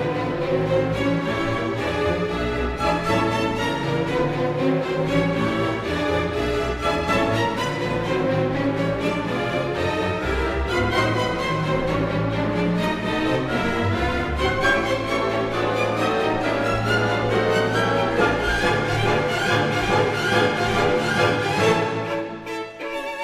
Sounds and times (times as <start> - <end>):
Violin, fiddle: 0.0 - 23.2.